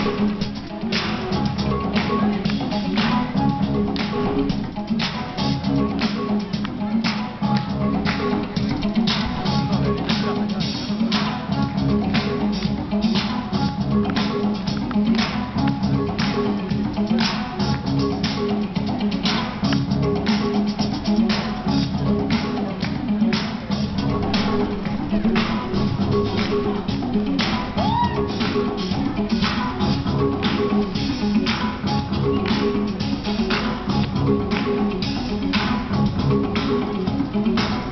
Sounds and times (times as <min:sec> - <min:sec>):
Music: 0:00.0 - 0:37.9.